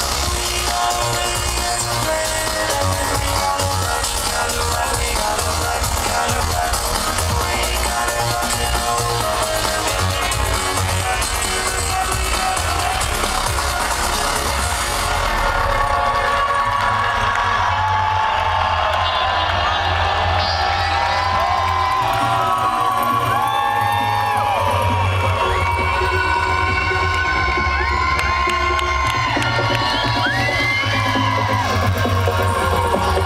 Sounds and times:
Dance music: 0.0s - 33.2s.

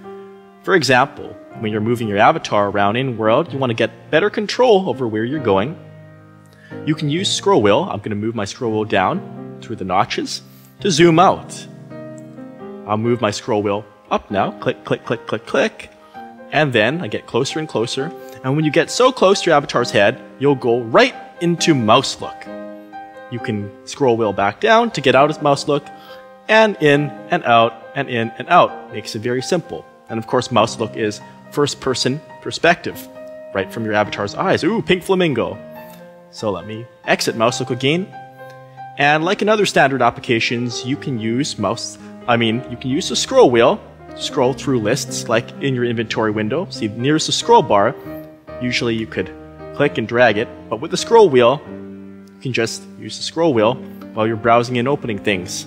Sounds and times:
Music: 0.0s - 55.6s
Speech: 0.7s - 5.8s, 6.9s - 11.7s, 12.9s - 15.9s, 16.5s - 22.5s, 23.3s - 25.9s, 26.5s - 35.6s, 36.3s - 38.2s, 39.0s - 48.0s, 48.6s - 51.7s, 52.4s - 55.6s.

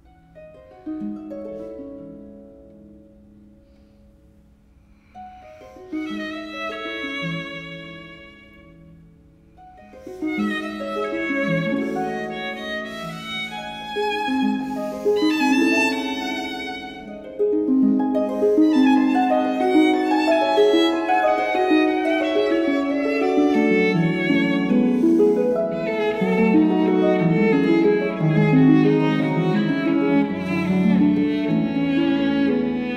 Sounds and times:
Pizzicato: 0.0s - 32.9s.

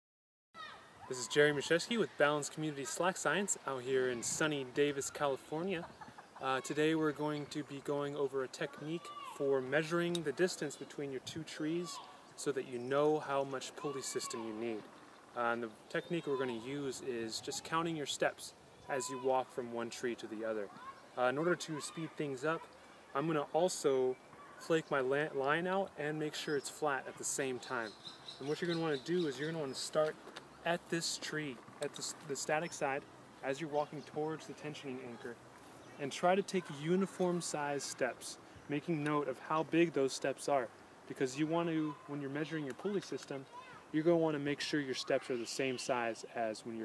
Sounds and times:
Speech: 1.1s - 35.4s, 36.0s - 46.8s.

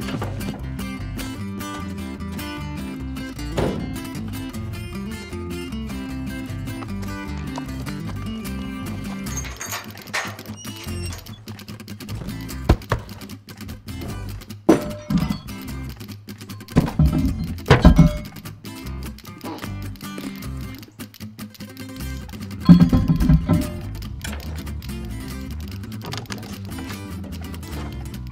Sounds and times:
Music: 0.0s - 28.3s.

